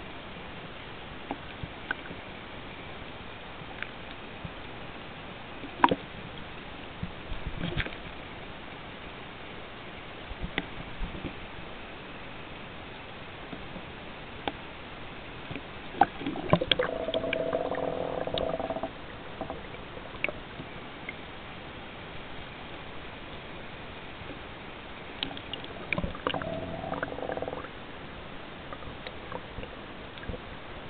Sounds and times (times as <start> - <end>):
Outside, rural or natural: 0.0 - 30.9.